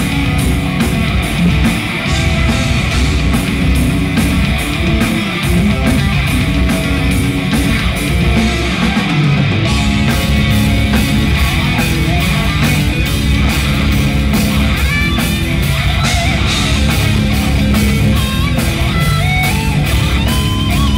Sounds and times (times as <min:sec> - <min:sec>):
Heavy metal: 0:00.0 - 0:20.9.